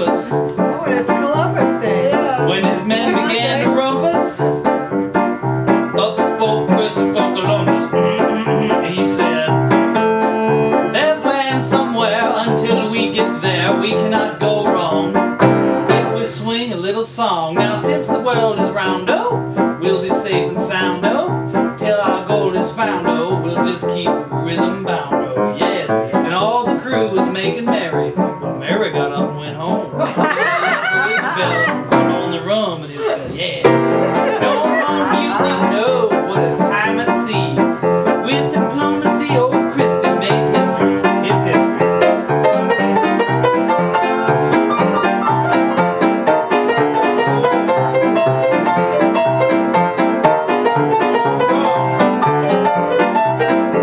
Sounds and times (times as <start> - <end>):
Music: 0.0 - 53.8
Male singing: 1.8 - 4.5, 6.0 - 9.6, 11.0 - 15.1, 21.8 - 27.8, 34.4 - 37.3.